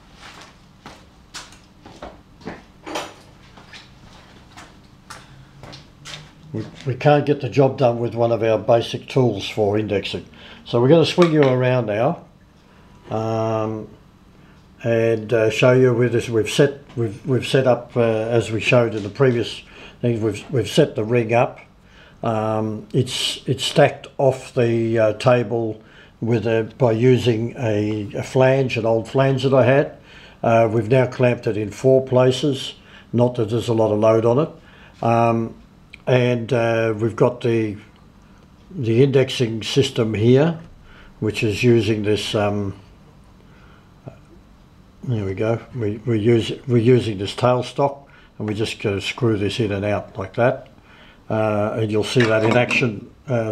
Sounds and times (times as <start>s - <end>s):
Speech: 6.5s - 12.3s, 13.1s - 14.0s, 14.8s - 37.9s, 38.7s - 42.9s, 45.0s - 50.7s, 51.3s - 53.5s.